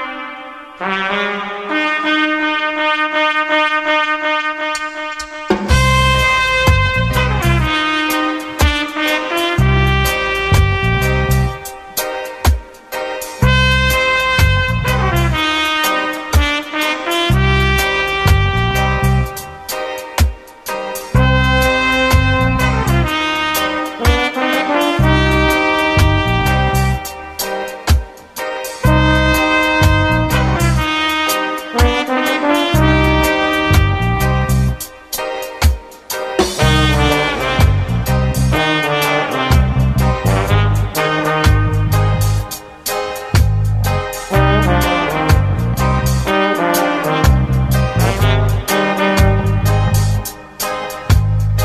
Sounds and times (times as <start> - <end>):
Music: 0.0 - 51.6.